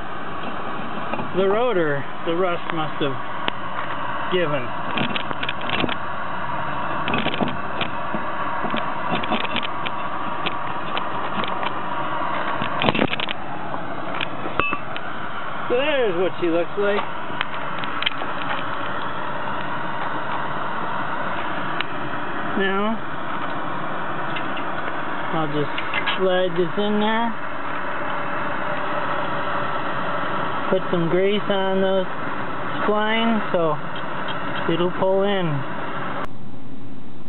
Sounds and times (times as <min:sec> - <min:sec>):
Idling: 0:00.0 - 0:36.7
Vehicle: 0:00.0 - 0:37.2.